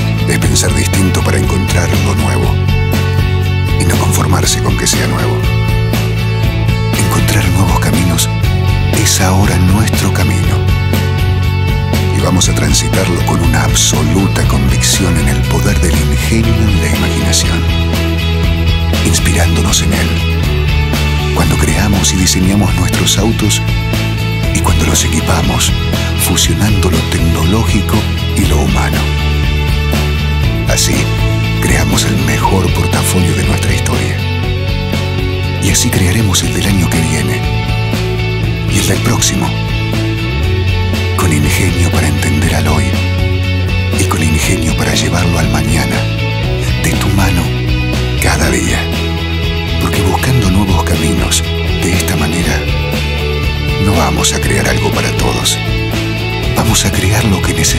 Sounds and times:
Music: 0.0s - 57.7s
Speech: 0.2s - 2.6s, 3.8s - 5.5s, 7.0s - 10.7s, 12.1s - 17.7s, 19.0s - 20.2s, 21.3s - 23.6s, 24.5s - 29.2s, 30.7s - 34.2s, 35.6s - 37.5s, 38.7s - 39.6s, 41.2s - 43.0s, 44.0s - 47.6s, 48.2s - 48.9s, 49.8s - 52.8s, 53.8s - 55.6s, 56.6s - 57.7s.

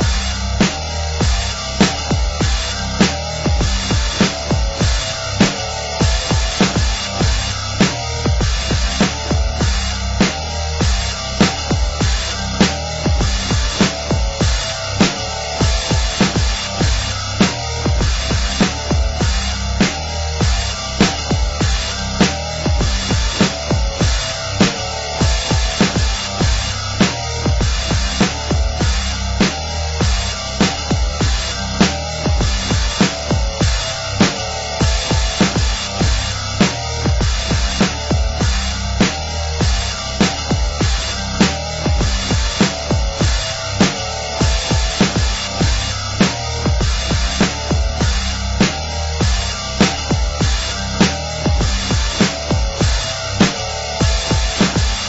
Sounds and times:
Music: 0.0s - 55.0s.

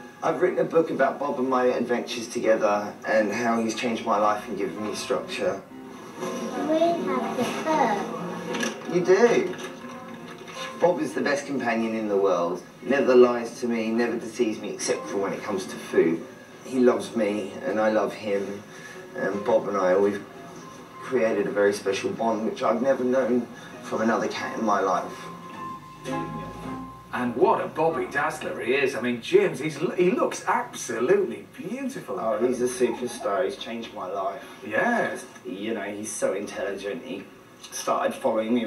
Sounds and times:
Music: 0.0s - 30.2s
Speech: 0.2s - 5.7s, 10.8s - 18.6s, 27.2s - 38.6s.

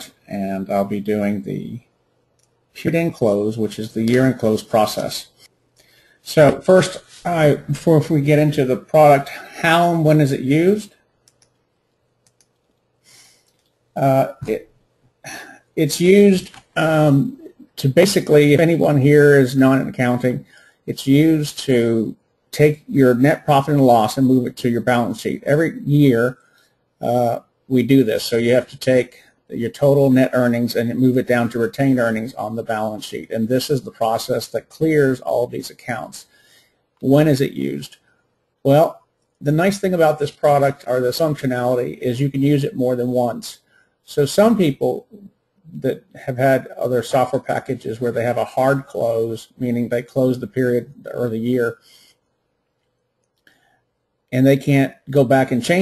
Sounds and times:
Speech: 0.0s - 2.0s, 2.7s - 5.5s, 6.2s - 11.1s, 14.0s - 14.7s, 15.3s - 26.4s, 27.0s - 36.4s, 37.0s - 38.0s, 38.6s - 51.9s, 54.3s - 55.8s.

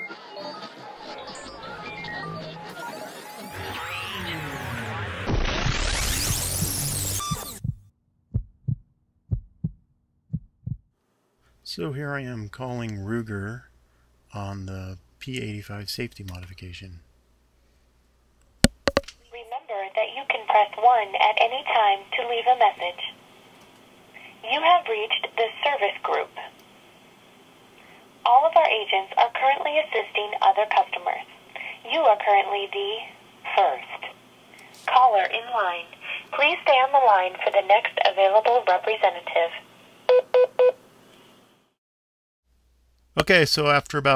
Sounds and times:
Speech: 11.7s - 13.7s, 14.3s - 17.0s, 19.4s - 23.2s, 24.4s - 26.5s, 28.3s - 34.2s, 34.9s - 39.6s, 43.2s - 44.1s.

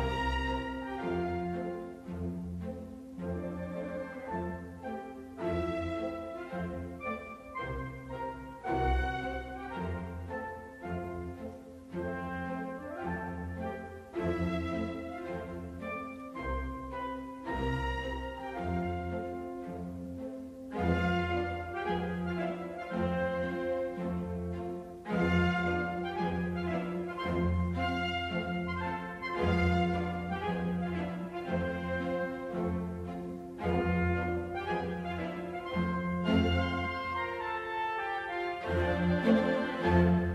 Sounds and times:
Music: 0.0s - 40.3s.

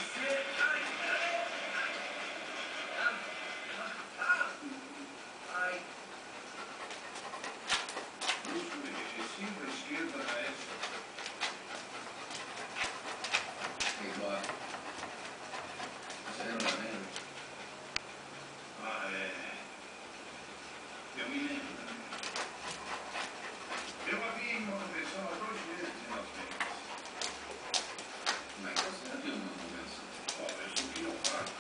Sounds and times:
Speech: 0.0s - 2.0s, 8.4s - 10.9s, 13.9s - 14.6s, 16.3s - 17.2s, 18.8s - 19.7s, 21.2s - 22.2s, 24.0s - 26.8s, 28.5s - 31.6s.

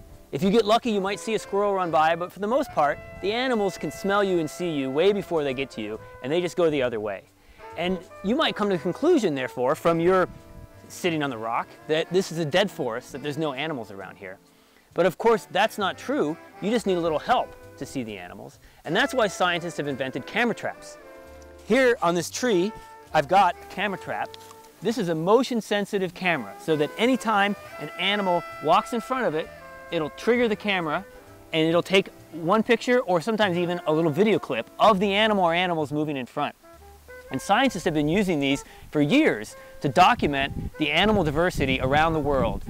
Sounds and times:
Music: 0.0s - 42.6s
Speech: 0.4s - 10.3s, 10.9s - 14.4s, 15.0s - 21.0s, 21.7s - 36.6s, 37.3s - 42.6s.

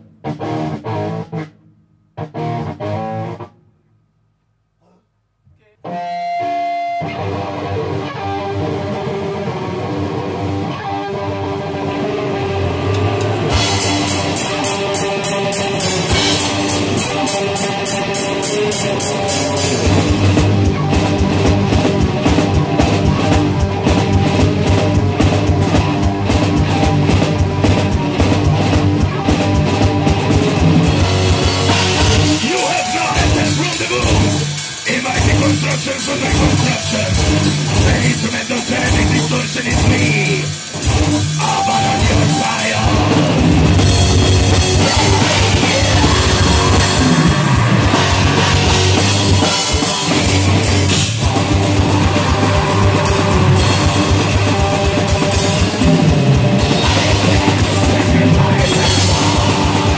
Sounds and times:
Drum kit: 5.9s - 59.9s
Heavy metal: 5.9s - 59.9s
Drum: 11.8s - 59.9s.

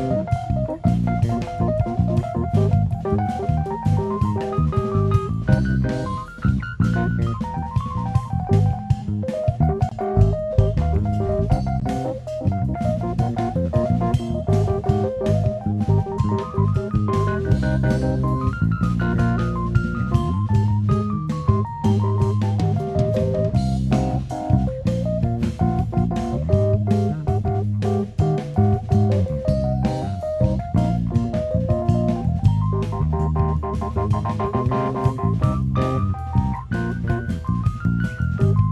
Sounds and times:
Drum: 0.0s - 38.7s
Drum and bass: 0.0s - 38.7s
Drum kit: 0.0s - 38.7s
Piano: 0.0s - 38.7s.

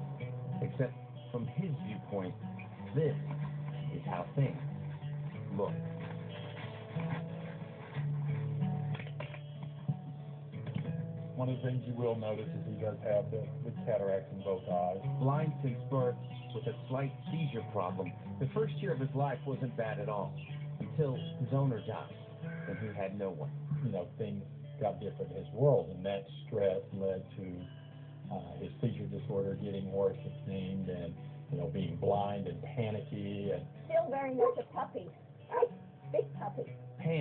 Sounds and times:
Music: 0.0s - 37.2s
Speech: 0.6s - 3.3s, 3.9s - 4.7s, 5.4s - 5.8s, 11.4s - 27.7s, 28.3s - 37.2s.

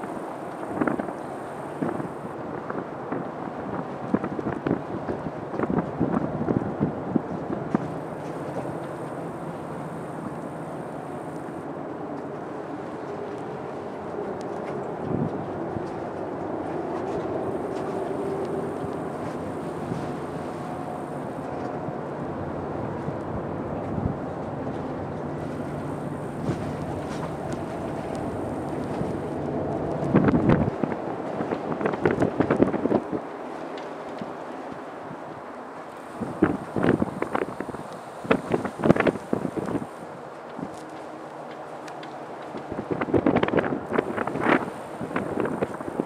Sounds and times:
Wind noise (microphone): 0.0s - 8.8s, 15.0s - 16.2s, 22.8s - 33.3s, 36.1s - 40.8s, 42.6s - 46.0s.

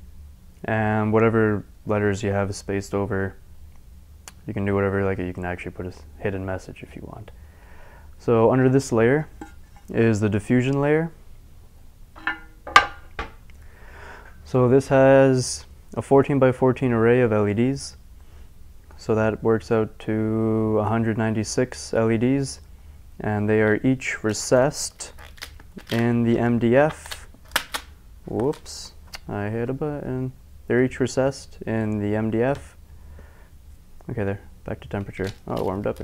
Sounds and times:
Speech: 0.6s - 3.4s, 4.3s - 7.4s, 8.2s - 11.2s, 14.5s - 18.0s, 19.0s - 22.6s, 23.2s - 25.2s, 25.8s - 27.2s, 28.3s - 32.8s, 34.0s - 36.0s.

